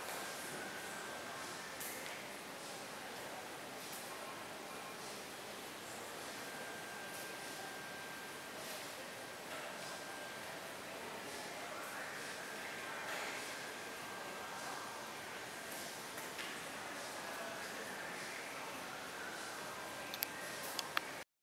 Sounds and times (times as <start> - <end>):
Inside, large room or hall: 0.0 - 21.2
Inside, public space: 0.0 - 21.2.